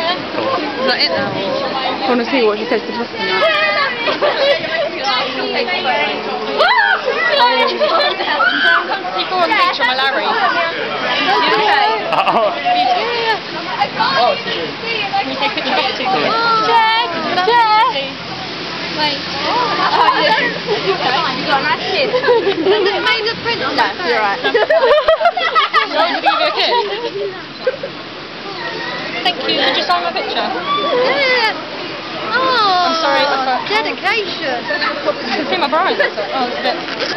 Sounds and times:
Outside, urban or manmade: 0.0 - 37.1.

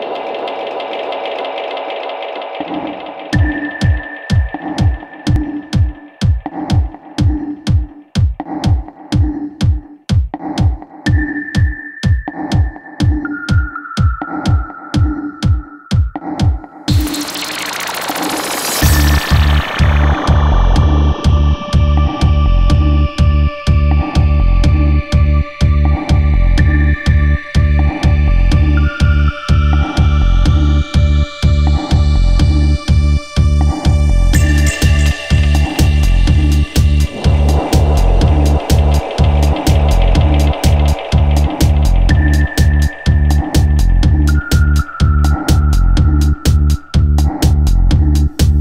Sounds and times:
Electronica: 0.0 - 48.6
Techno: 0.0 - 48.6.

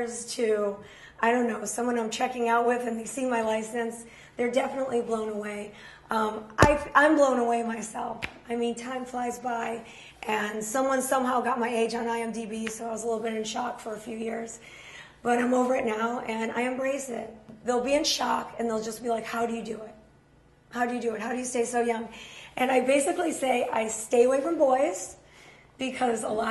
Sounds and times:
Speech: 0.0 - 14.6, 15.2 - 20.0, 20.7 - 25.2, 25.8 - 26.5.

